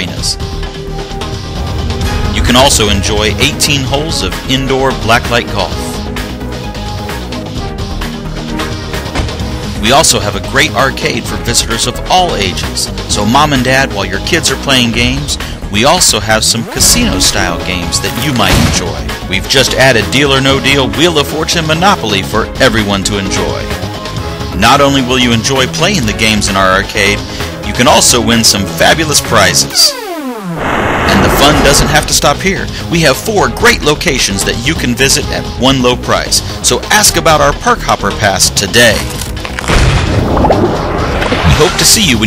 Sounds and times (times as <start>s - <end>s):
Speech: 0.0s - 0.4s, 2.4s - 6.0s, 9.8s - 23.8s, 24.6s - 29.9s, 31.1s - 39.0s, 41.5s - 42.2s
Music: 0.0s - 42.2s.